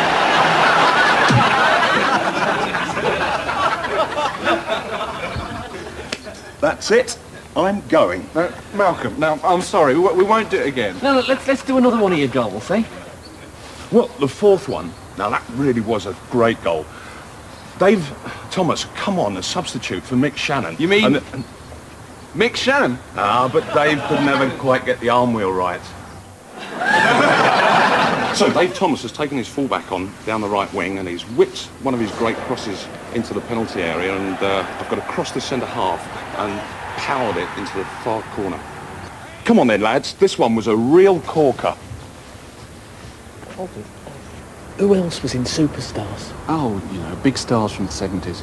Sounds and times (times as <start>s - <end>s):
Speech: 6.6s - 13.2s, 13.9s - 16.9s, 17.8s - 21.5s, 22.4s - 26.0s, 28.3s - 38.6s, 39.2s - 41.8s, 44.8s - 48.4s.